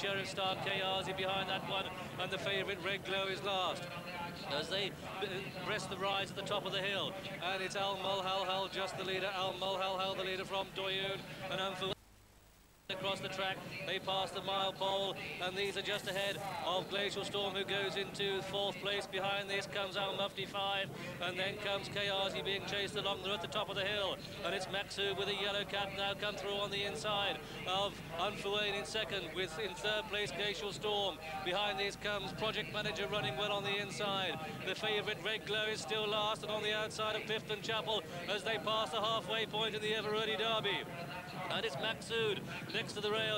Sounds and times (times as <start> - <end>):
Speech: 0.0 - 12.0, 12.9 - 43.3.